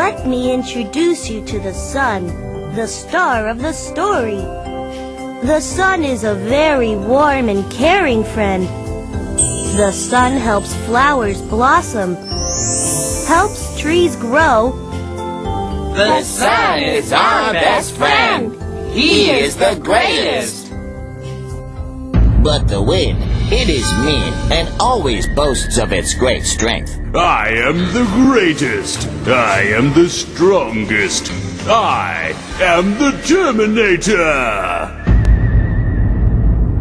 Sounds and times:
Music: 0.0s - 36.8s
Speech: 9.8s - 12.2s, 16.0s - 20.7s, 22.4s - 35.0s.

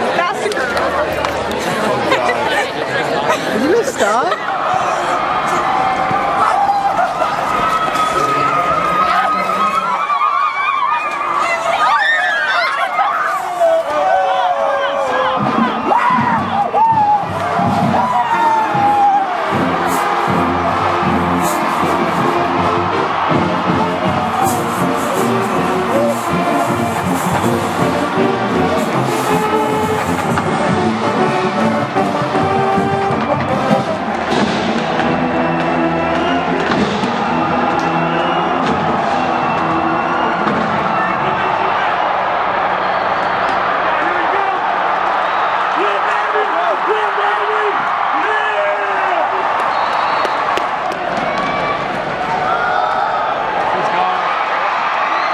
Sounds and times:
Music: 15.4s - 41.2s.

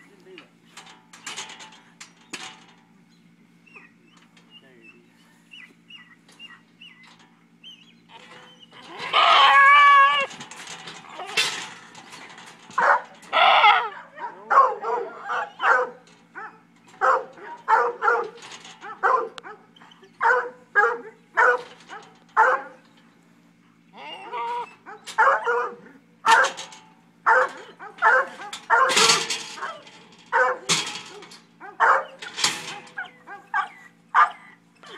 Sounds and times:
Goat: 8.1s - 10.3s, 12.7s - 22.8s, 23.7s - 26.6s, 27.3s - 34.9s
Bark: 12.8s - 22.8s, 24.8s - 26.6s, 27.3s - 32.2s, 33.0s - 34.6s.

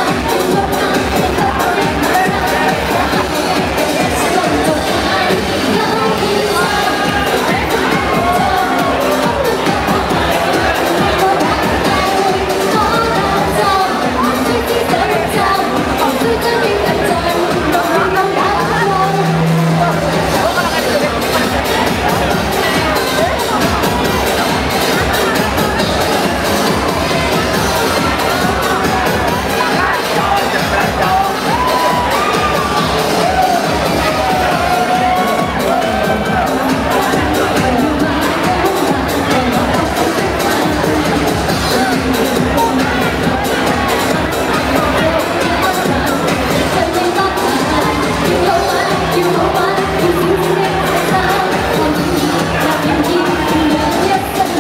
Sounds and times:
Disco: 0.0s - 54.6s
Inside, public space: 0.0s - 54.6s
Singing: 0.0s - 54.6s
Speech: 0.0s - 54.6s.

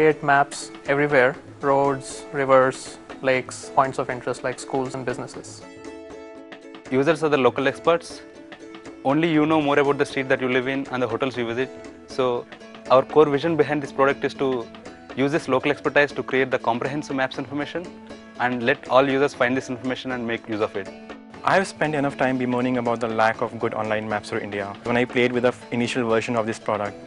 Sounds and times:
Speech: 0.0s - 5.6s, 6.9s - 8.2s, 9.0s - 27.0s
Music: 0.0s - 27.0s.

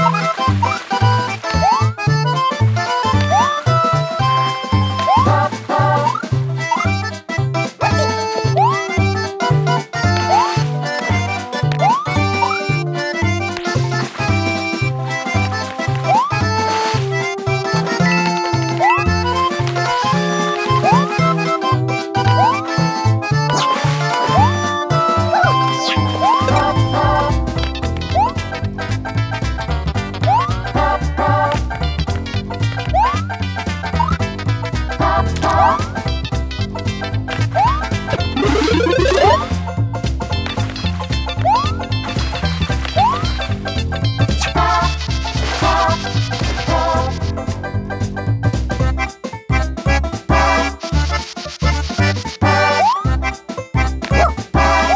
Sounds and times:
Music: 0.0s - 54.9s.

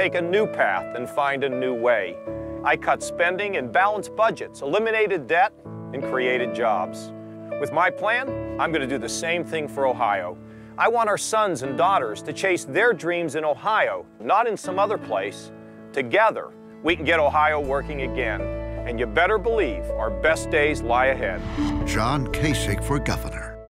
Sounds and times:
Music: 0.0s - 23.7s
Speech: 0.0s - 23.7s.

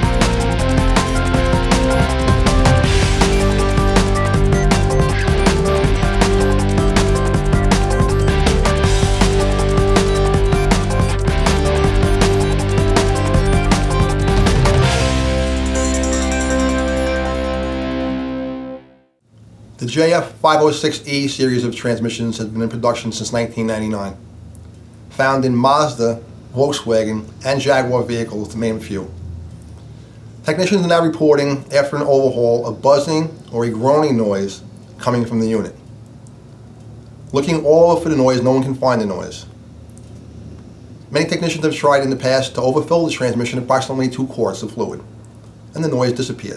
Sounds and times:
Music: 0.0s - 19.2s
Speech: 19.8s - 24.2s, 25.1s - 29.2s, 30.4s - 35.8s, 37.3s - 39.6s, 41.1s - 45.1s, 45.7s - 46.5s.

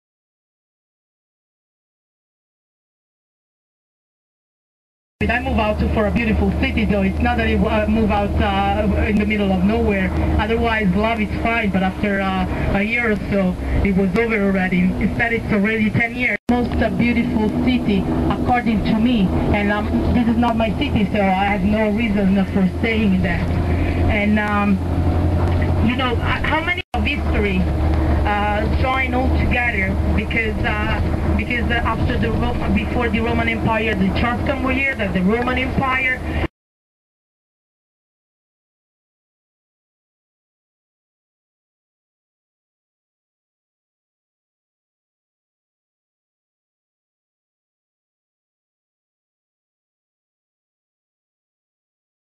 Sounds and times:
Speech: 5.2s - 24.8s, 25.4s - 36.5s.

